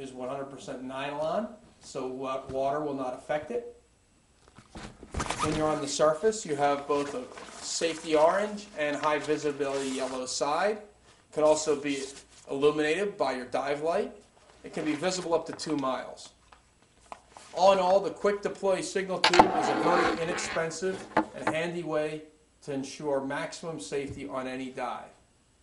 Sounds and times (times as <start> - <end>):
Speech: 0.0 - 3.8, 5.4 - 16.4, 17.5 - 25.2.